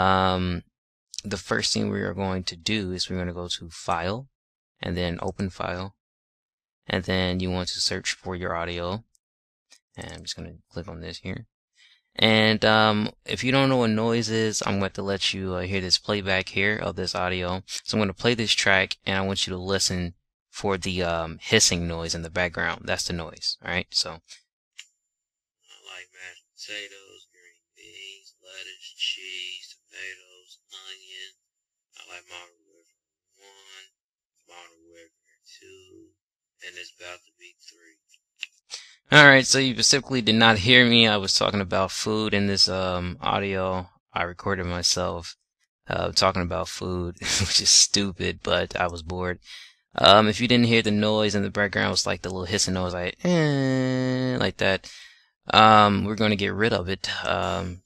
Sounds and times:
Speech: 0:00.0 - 0:00.6, 0:01.2 - 0:05.9, 0:06.9 - 0:09.0, 0:10.0 - 0:11.4, 0:12.2 - 0:24.4, 0:25.7 - 0:31.3, 0:32.0 - 0:32.5, 0:33.4 - 0:33.9, 0:34.5 - 0:36.0, 0:36.6 - 0:45.3, 0:45.9 - 0:57.8.

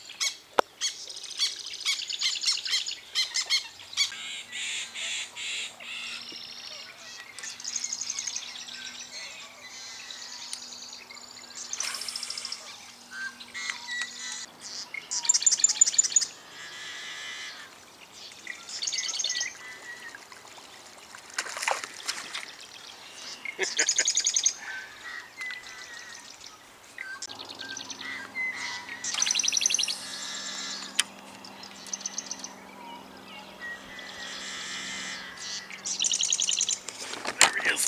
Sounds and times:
Stream: 0:17.4 - 0:32.6.

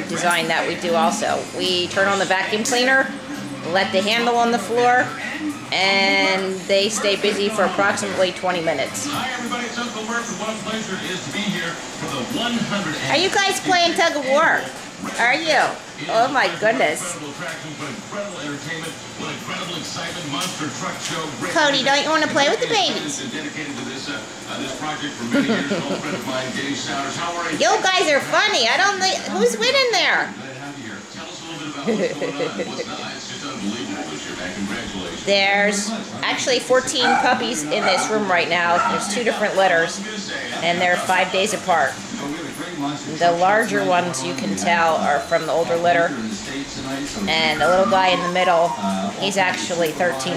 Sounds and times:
Dog: 0:37.0 - 0:39.2.

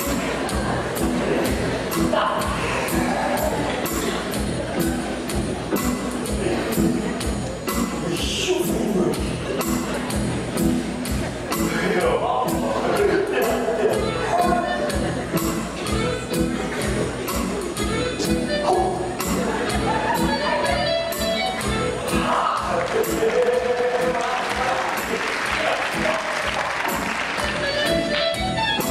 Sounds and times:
Background music: 0:00.0 - 0:28.9.

